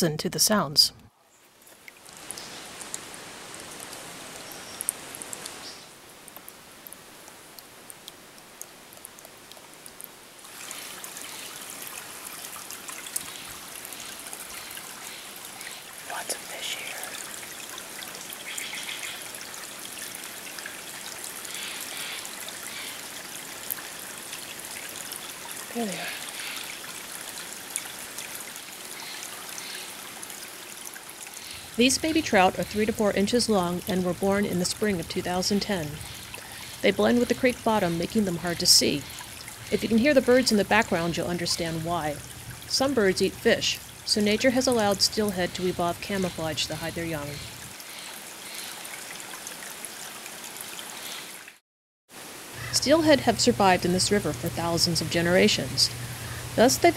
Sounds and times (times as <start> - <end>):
Speech: 0.0 - 1.0, 25.7 - 26.2, 31.8 - 36.0, 36.8 - 39.1, 39.7 - 47.4, 52.6 - 55.9, 56.6 - 56.9
Stream: 0.0 - 56.9.